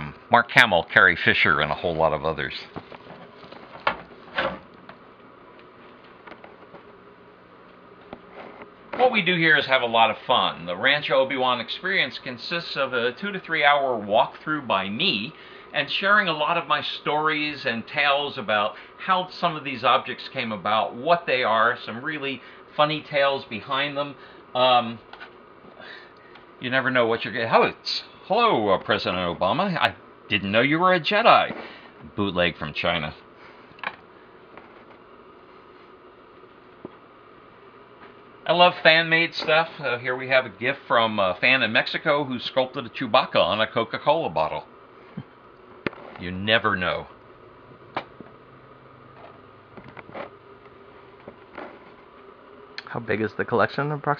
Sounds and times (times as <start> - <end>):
Speech: 0.0 - 2.8, 9.0 - 25.0, 26.6 - 33.2, 38.4 - 44.7, 46.2 - 47.2, 52.8 - 54.1.